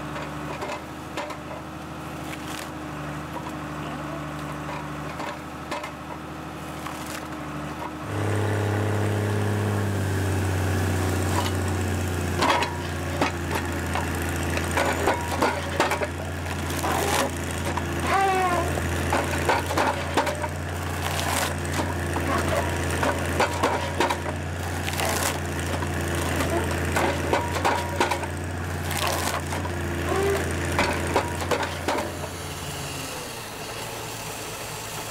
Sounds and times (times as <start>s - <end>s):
Wood: 12.4s - 32.3s.